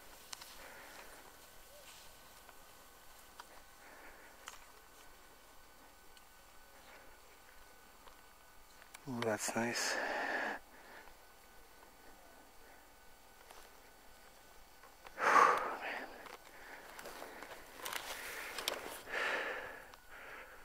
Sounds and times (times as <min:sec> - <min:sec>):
Speech: 0:09.0 - 0:10.1.